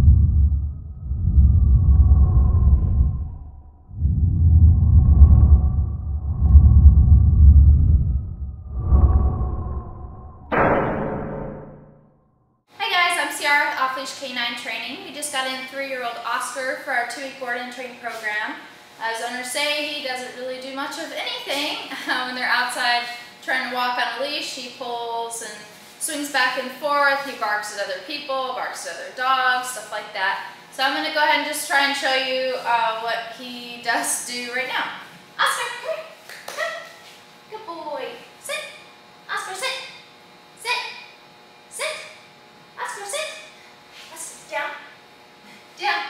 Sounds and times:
Speech: 12.8 - 40.0, 40.6 - 41.0, 41.7 - 42.2, 42.8 - 45.0, 45.8 - 46.0.

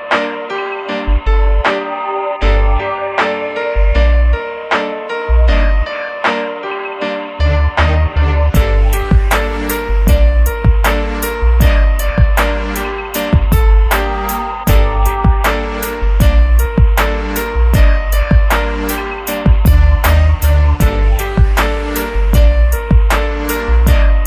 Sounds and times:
Music: 0.0 - 24.2.

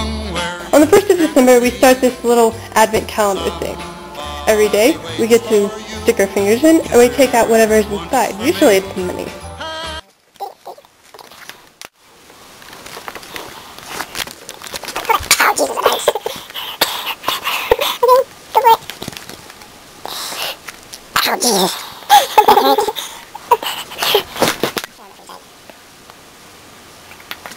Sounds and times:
Music: 0.0 - 10.0
Inside, small room: 0.0 - 27.5.

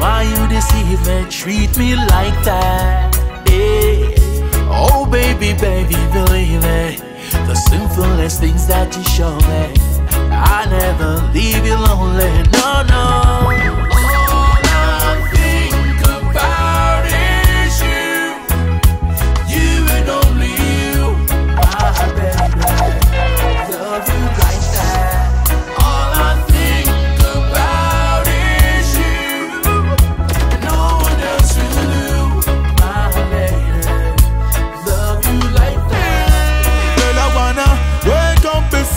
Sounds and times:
Music: 0.0 - 38.9.

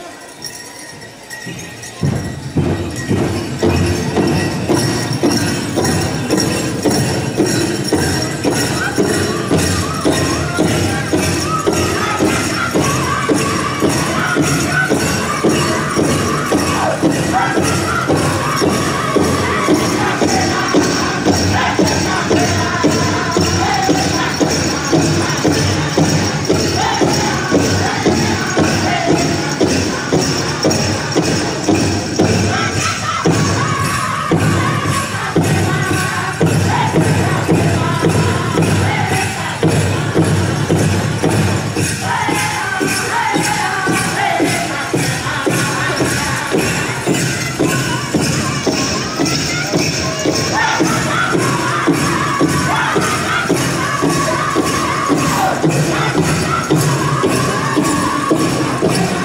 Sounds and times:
Music: 0.0 - 59.2.

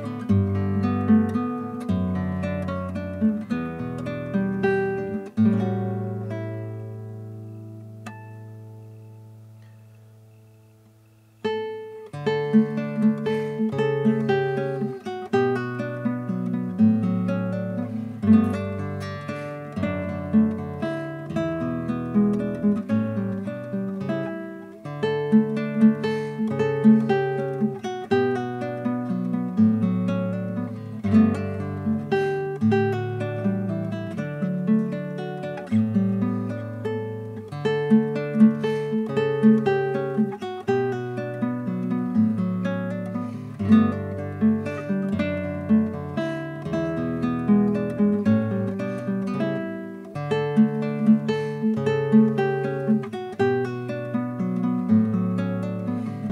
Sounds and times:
Strum: 0.0 - 56.3.

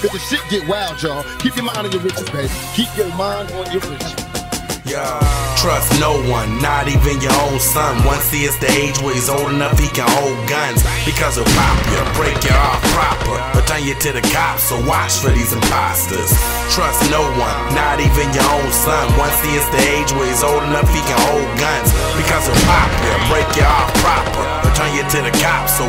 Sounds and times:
Music: 0.0 - 25.8.

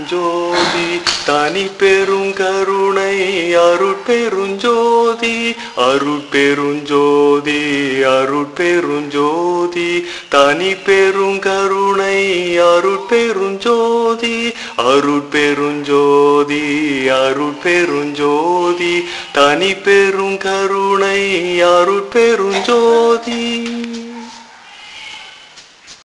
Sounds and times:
Mantra: 0.0 - 24.5.

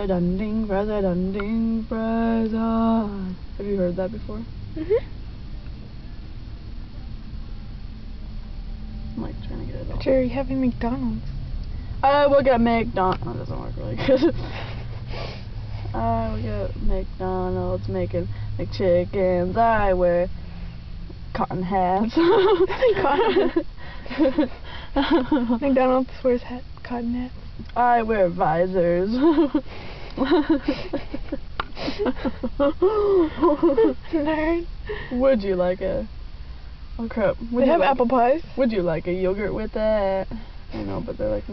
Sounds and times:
Speech: 16.0 - 20.3, 37.0 - 41.5.

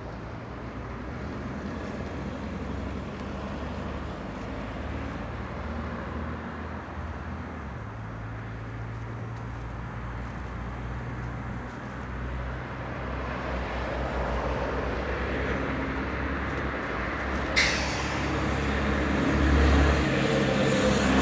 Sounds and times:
Bus: 0.0 - 21.2.

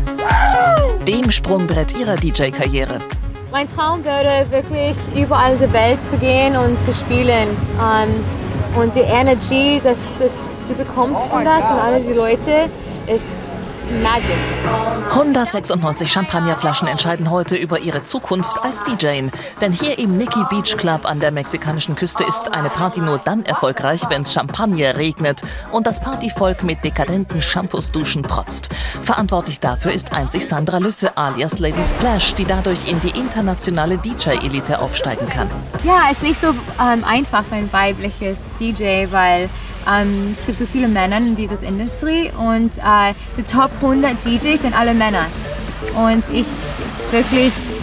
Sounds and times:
Music: 0.0 - 47.8
Speech: 1.0 - 3.0, 3.6 - 8.2, 8.8 - 45.3, 45.9 - 46.5, 47.2 - 47.6.

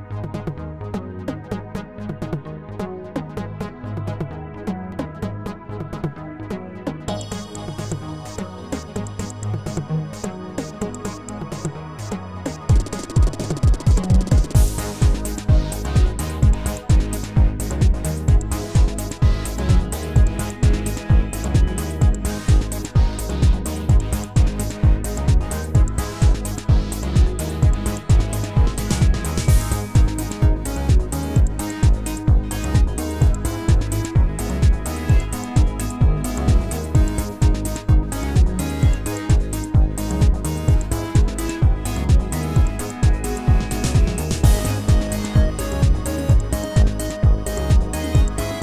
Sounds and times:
Music: 0.0 - 48.6.

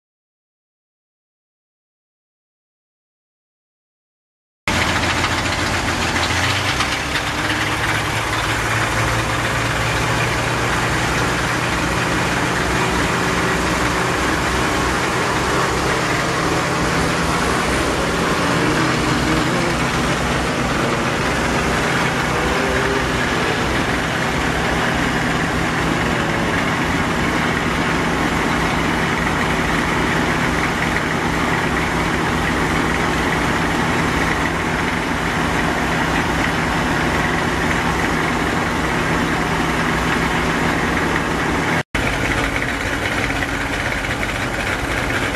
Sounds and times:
Vehicle: 4.7 - 45.3.

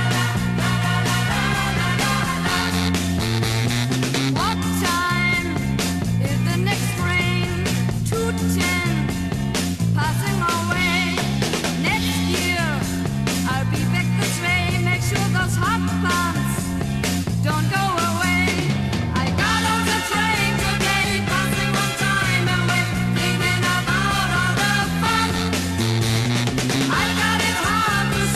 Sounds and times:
Psychedelic rock: 0.0 - 28.3.

